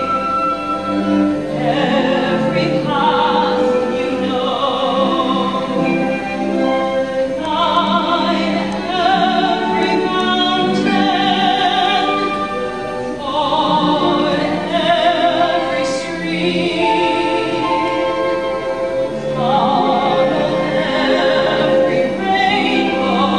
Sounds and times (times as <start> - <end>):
Opera: 0.0 - 23.3.